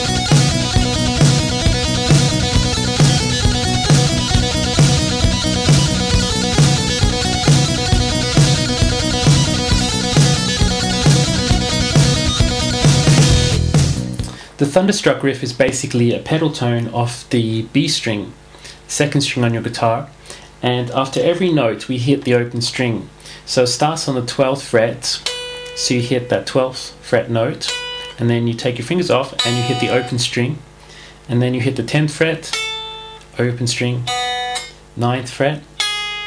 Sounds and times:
Bass guitar: 0.0 - 14.4
Strum: 0.0 - 14.4
Electric guitar: 0.0 - 14.5, 29.4 - 30.2
Speech: 14.6 - 30.7, 31.3 - 32.6, 33.4 - 34.1, 35.0 - 35.7.

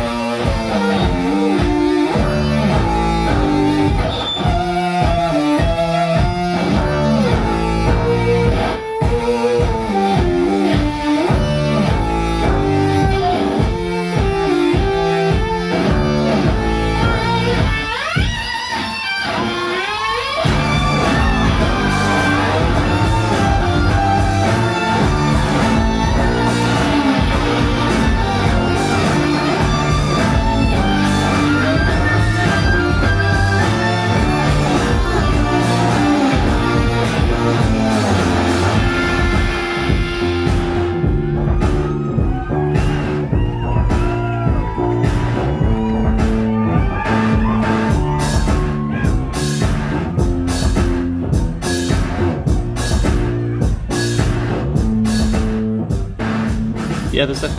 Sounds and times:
Music: 0.0 - 57.5.

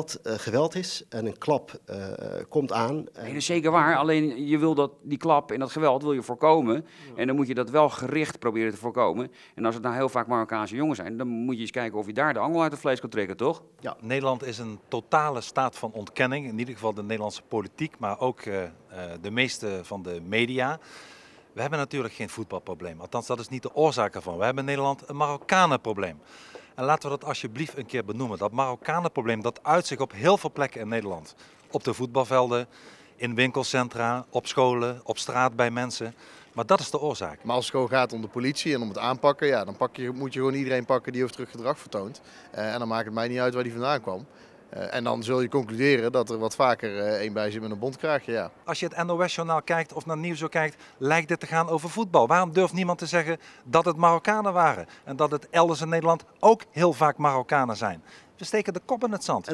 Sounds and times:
Speech: 0.0 - 20.8, 21.6 - 26.2, 26.8 - 59.5.

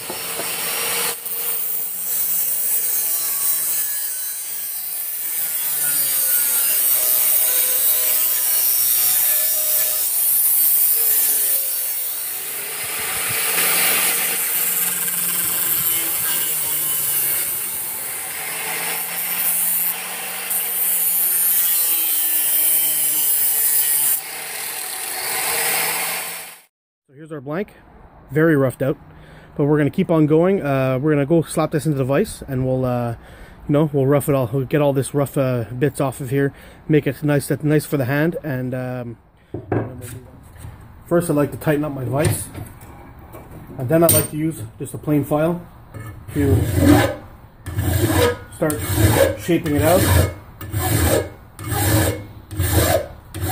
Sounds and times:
Power tool: 0.0 - 26.7, 46.4 - 53.5.

